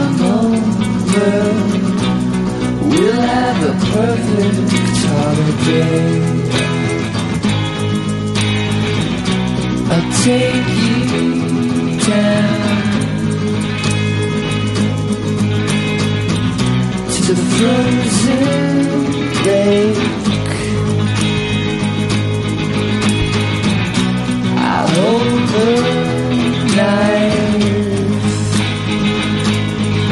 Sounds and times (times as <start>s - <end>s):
Music: 0.0s - 30.1s.